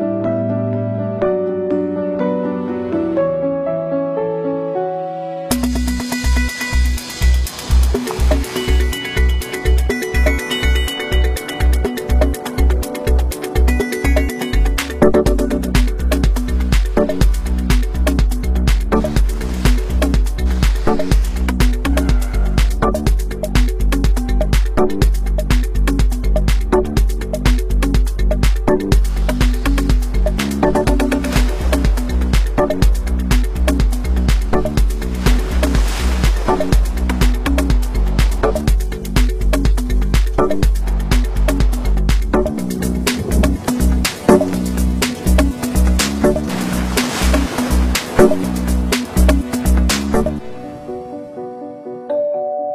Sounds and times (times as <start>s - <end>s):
Music: 0.0s - 52.7s.